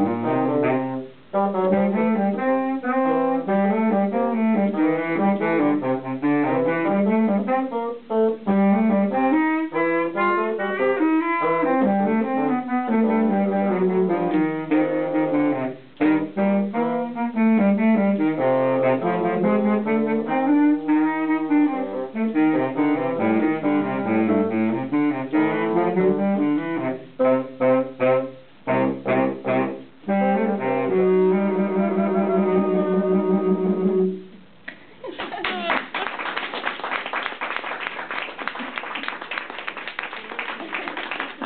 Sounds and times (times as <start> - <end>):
Saxophone: 0.0 - 34.4
Jazz: 0.0 - 34.8
Clapping: 34.7 - 41.4.